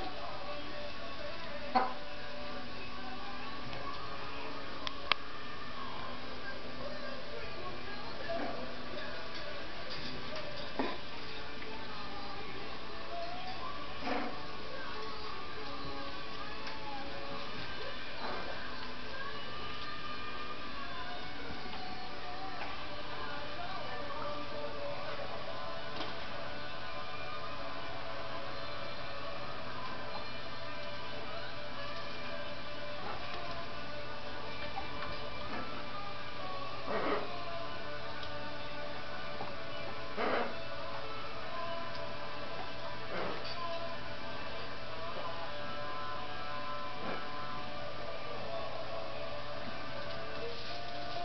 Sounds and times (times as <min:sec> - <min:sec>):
Music: 0:00.0 - 0:51.2.